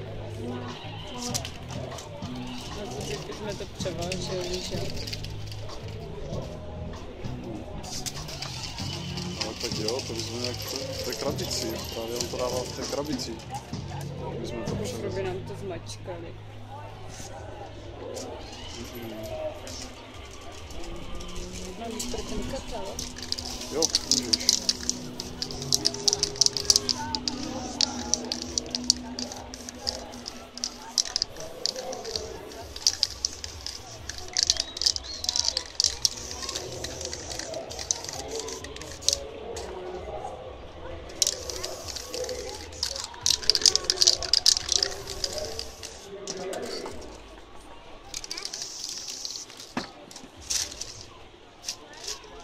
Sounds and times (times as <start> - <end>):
Music: 0.0 - 52.4.